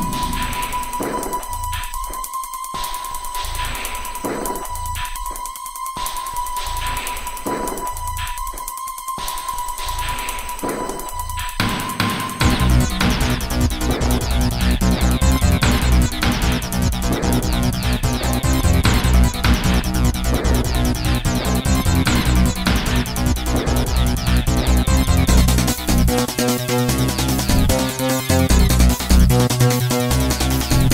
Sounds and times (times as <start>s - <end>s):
Music: 0.0s - 30.9s.